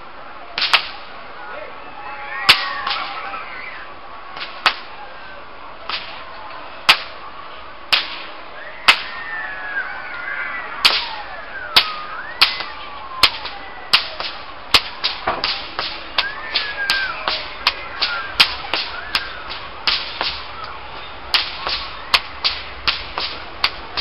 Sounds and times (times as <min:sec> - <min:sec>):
Whip: 0:00.6 - 0:01.0, 0:02.5 - 0:03.2, 0:04.4 - 0:04.9, 0:05.9 - 0:06.3, 0:06.9 - 0:07.2, 0:07.9 - 0:08.3, 0:08.9 - 0:09.1, 0:10.8 - 0:24.0.